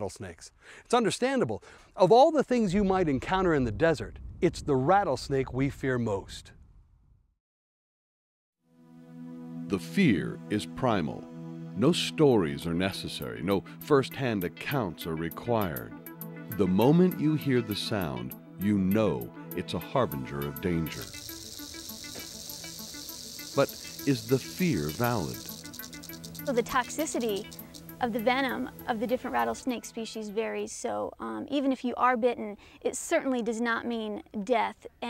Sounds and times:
Speech: 0.0s - 6.5s, 9.7s - 11.2s, 11.8s - 15.9s, 16.5s - 21.1s, 23.6s - 25.4s, 26.5s - 27.4s, 28.0s - 35.0s
Outside, rural or natural: 0.0s - 7.3s, 20.5s - 30.0s
Music: 8.6s - 32.0s
Snake: 20.3s - 29.5s.

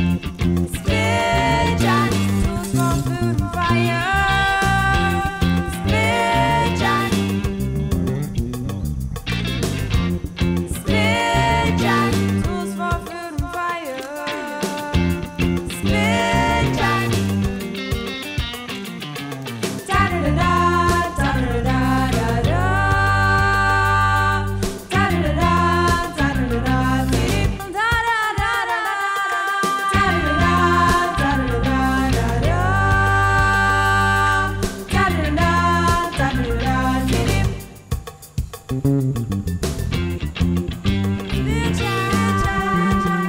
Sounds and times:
Music: 0.0s - 43.2s.

